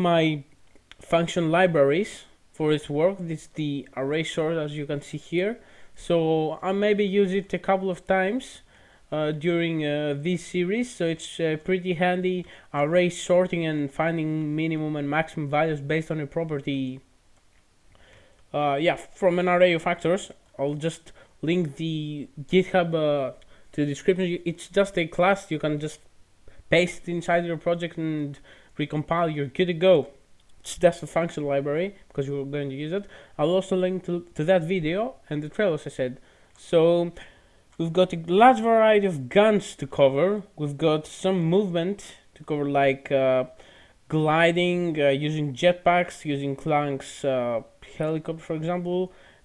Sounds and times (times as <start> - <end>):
Speech: 0.0 - 17.1, 18.5 - 26.1, 26.7 - 49.1.